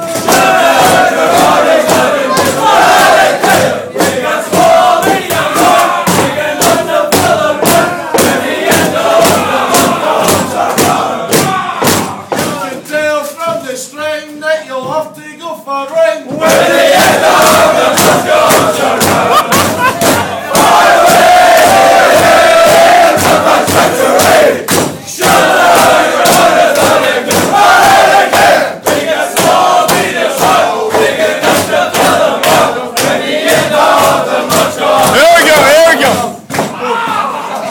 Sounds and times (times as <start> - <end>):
Singing: 0.0 - 37.7.